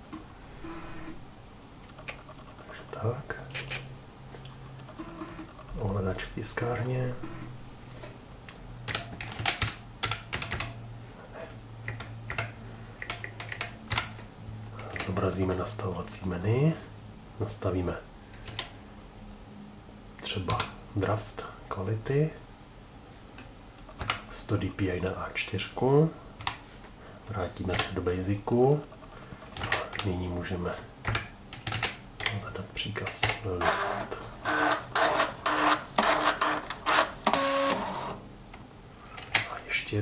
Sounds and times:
Speech: 2.7s - 3.5s, 5.8s - 7.2s, 14.8s - 18.1s, 20.2s - 22.4s, 24.3s - 26.2s, 27.3s - 28.9s, 29.7s - 30.9s, 32.3s - 34.3s, 39.4s - 40.0s
Printer: 4.8s - 5.8s, 7.2s - 7.5s, 33.6s - 38.2s.

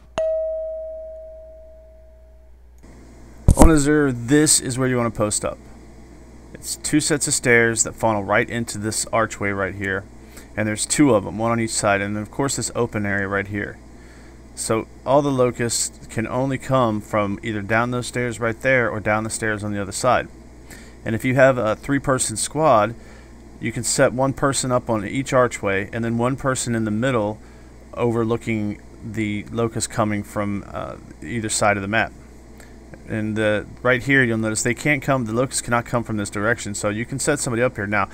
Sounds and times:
Speech: 3.5s - 5.6s, 6.5s - 13.8s, 14.6s - 20.3s, 21.0s - 23.0s, 23.6s - 32.2s, 33.0s - 38.1s.

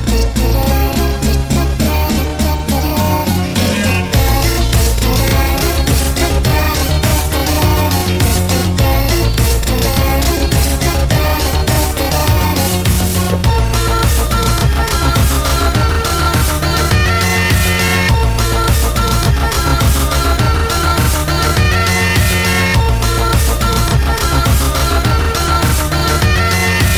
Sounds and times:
Soundtrack music: 0.0s - 26.9s.

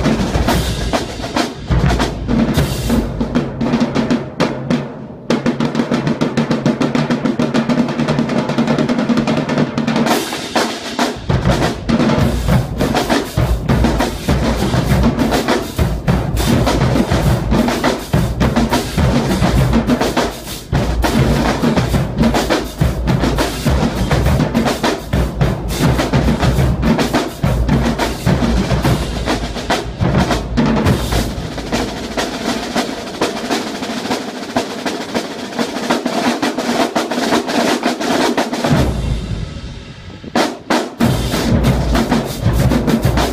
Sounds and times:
Percussion: 0.0s - 43.3s.

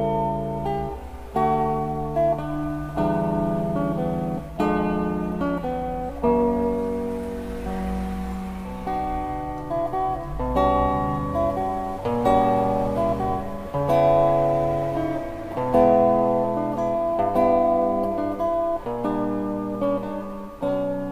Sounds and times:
Guitar: 0.0s - 21.1s.

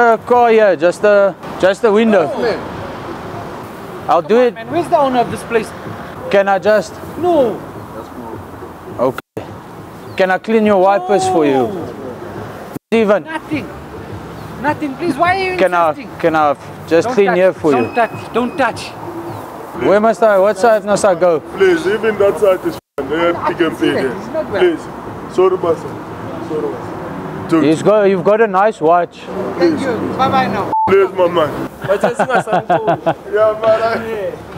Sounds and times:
Car passing by: 20.6s - 28.0s, 29.2s - 31.8s.

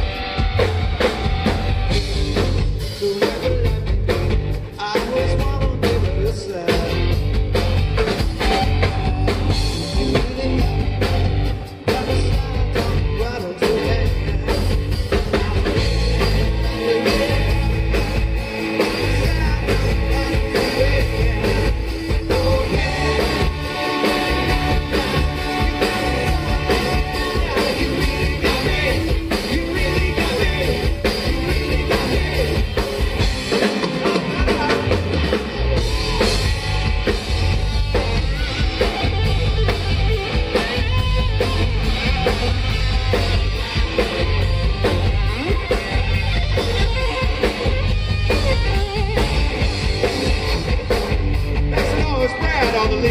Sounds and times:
Music: 0.0s - 53.1s
Singing: 11.8s - 32.6s.

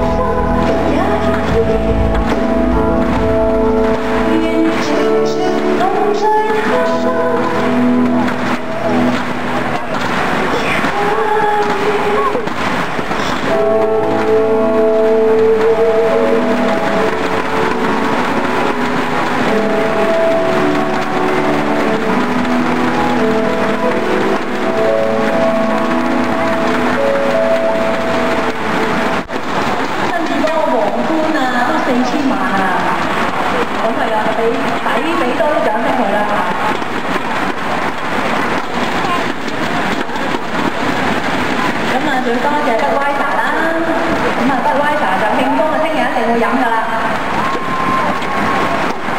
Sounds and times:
Music: 0.0s - 49.1s.

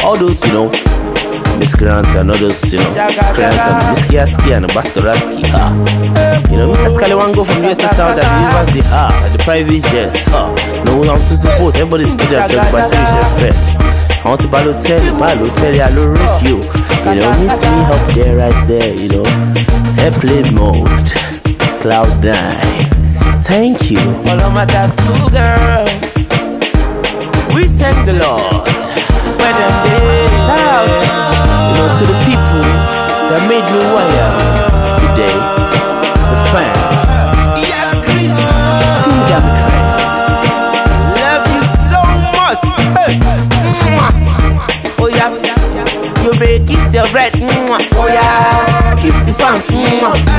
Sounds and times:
Afrobeat: 0.0s - 50.3s.

